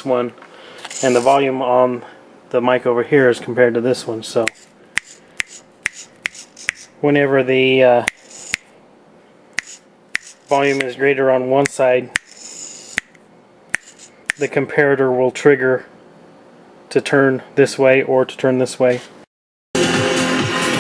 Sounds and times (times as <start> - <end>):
Speech: 0.0 - 0.4, 1.0 - 4.6, 7.0 - 8.1, 10.5 - 12.2, 14.4 - 15.9, 16.9 - 19.1.